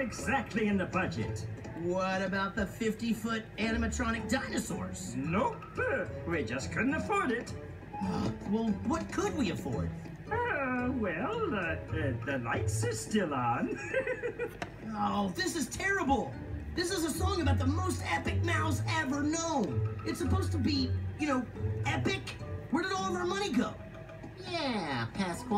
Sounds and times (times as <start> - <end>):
Speech: 0.0 - 7.5, 14.9 - 23.8
Music: 0.0 - 25.5.